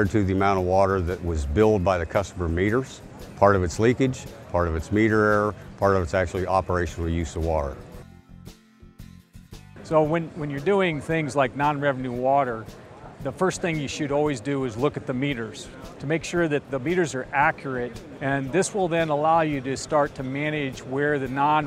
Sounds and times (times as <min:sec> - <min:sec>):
Speech: 0:00.0 - 0:07.8, 0:09.9 - 0:21.6
Music: 0:00.0 - 0:21.6.